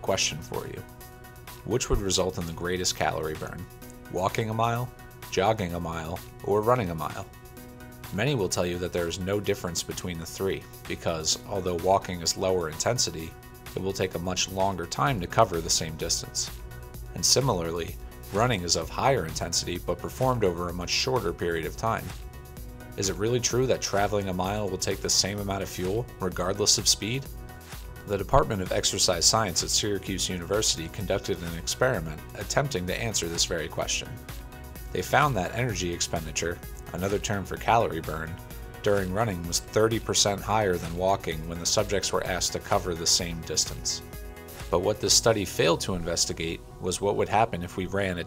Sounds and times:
Speech: 0.0 - 0.9, 1.7 - 7.3, 8.1 - 22.2, 23.0 - 27.3, 28.1 - 34.2, 34.9 - 44.0, 44.7 - 48.2
Music: 0.0 - 48.2.

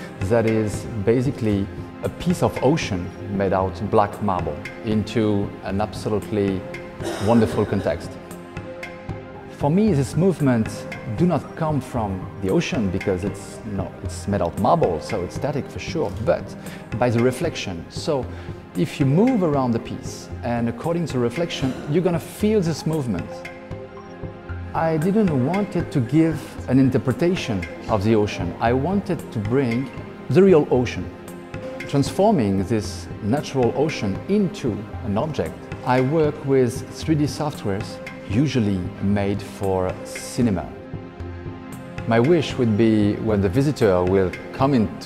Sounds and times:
Music: 0.0 - 45.0
Speech: 0.2 - 8.2, 9.6 - 23.4, 24.8 - 31.1, 31.8 - 40.8, 42.1 - 45.0.

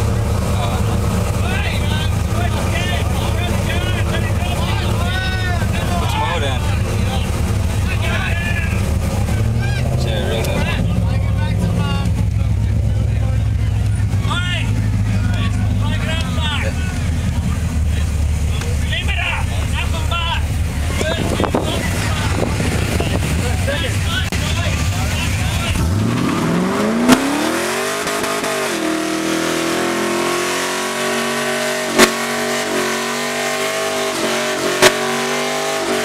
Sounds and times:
Car: 0.0 - 36.0
Speech: 0.4 - 25.9.

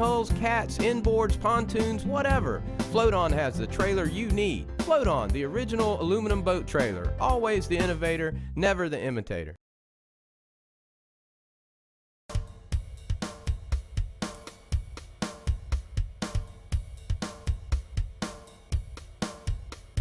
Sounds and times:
Music: 0.0 - 9.5, 12.3 - 20.0
Speech: 0.0 - 9.6.

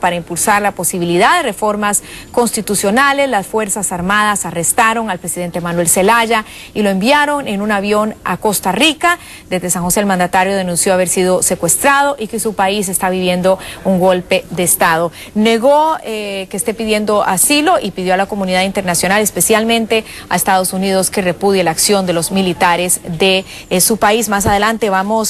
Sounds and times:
Speech: 0.0 - 25.3.

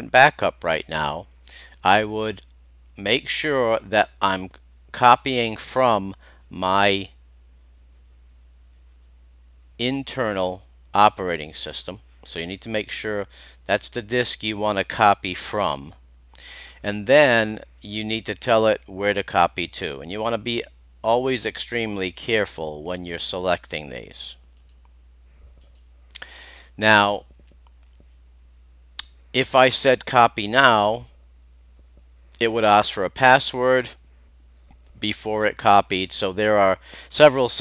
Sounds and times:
Speech: 0.0 - 7.2, 9.8 - 16.0, 16.8 - 24.4, 26.8 - 27.3, 29.4 - 31.1, 32.4 - 34.0, 35.0 - 37.6
Inside, small room: 0.0 - 37.6
Clicking: 24.6 - 24.9, 25.6 - 25.9.

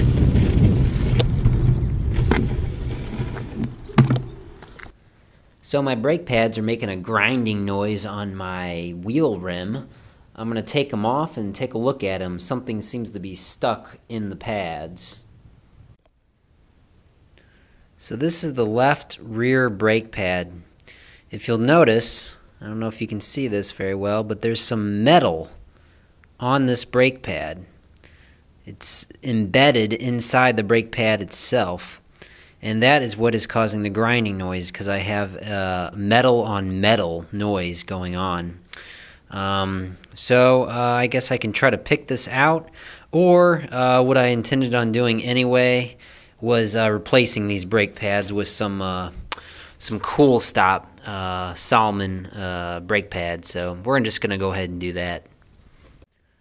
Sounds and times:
Speech: 5.6 - 15.2, 18.0 - 20.7, 21.3 - 25.6, 26.4 - 27.7, 28.6 - 32.0, 32.6 - 38.6, 39.3 - 49.2, 49.8 - 55.3.

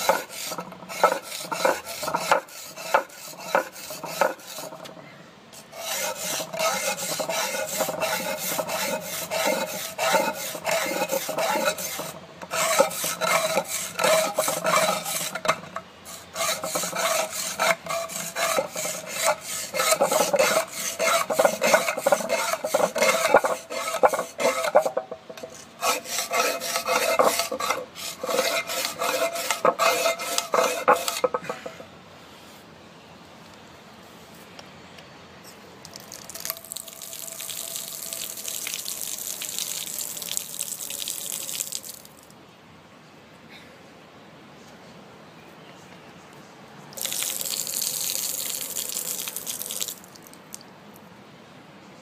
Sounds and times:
Liquid: 35.8 - 42.4, 47.0 - 50.7.

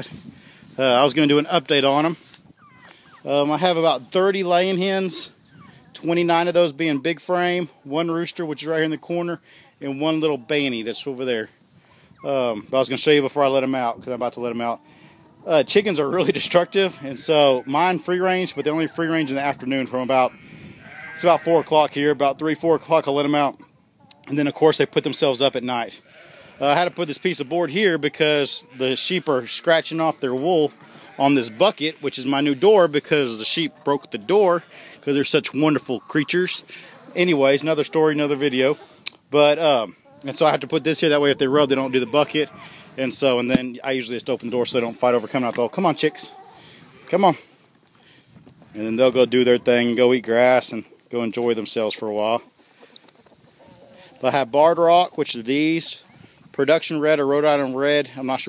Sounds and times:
Speech: 0.8 - 2.2, 3.2 - 5.3, 6.0 - 11.5, 12.2 - 14.8, 15.4 - 20.4, 21.1 - 26.0, 26.6 - 46.3, 47.1 - 47.5, 48.8 - 52.5, 54.2 - 56.0, 56.6 - 58.4
Cluck: 5.2 - 6.1, 23.3 - 24.7, 33.2 - 42.8, 52.4 - 54.4.

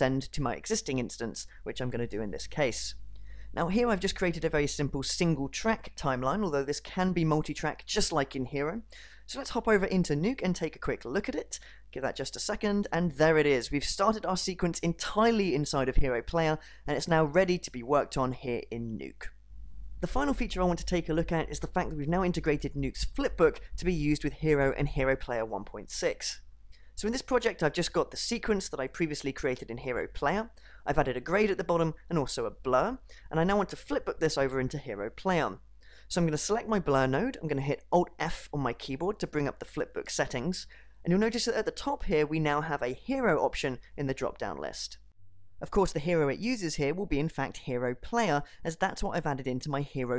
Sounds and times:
Narration, monologue: 0.0 - 50.1.

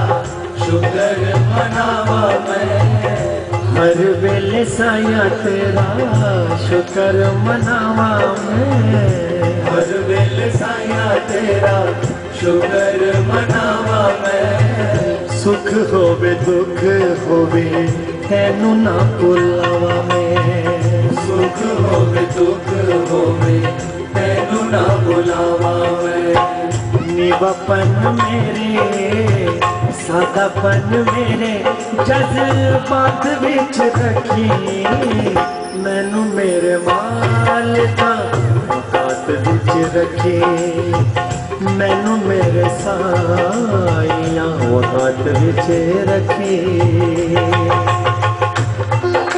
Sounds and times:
Singing: 0.0 - 48.3, 48.9 - 49.3
Folk music: 0.0 - 49.3.

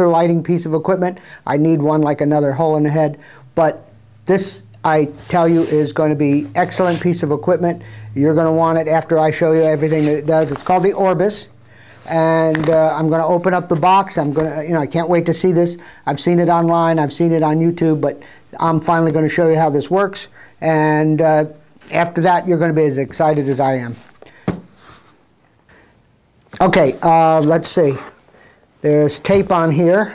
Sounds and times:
Speech: 0.0 - 24.1, 26.6 - 28.2, 28.8 - 30.1.

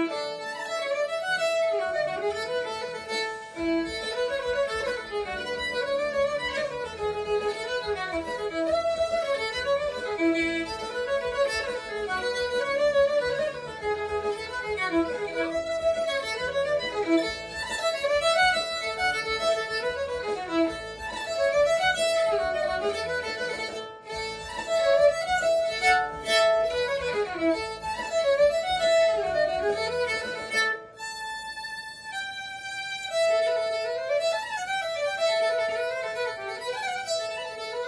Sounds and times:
String section: 0.0 - 37.8.

